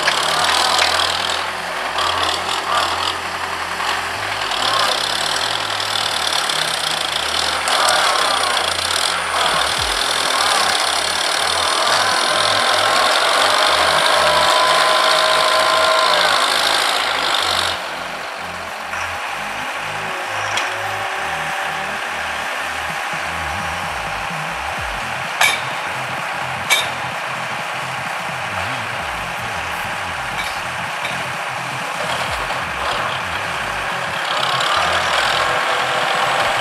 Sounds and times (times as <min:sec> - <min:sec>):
Vehicle: 0:00.0 - 0:36.6
Vibration: 0:00.0 - 0:36.6.